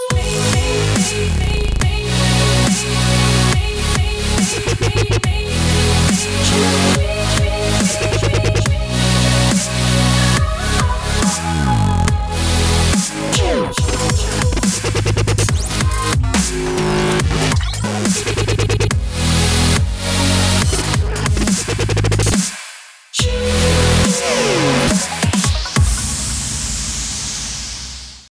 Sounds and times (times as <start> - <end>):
Dubstep: 0.0 - 28.3.